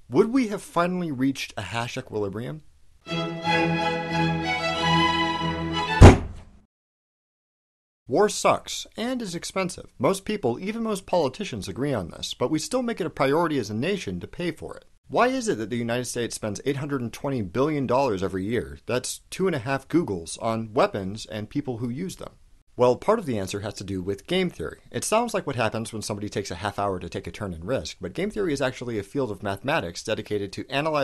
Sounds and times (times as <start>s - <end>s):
Narration, monologue: 0.0s - 3.0s, 8.1s - 31.0s.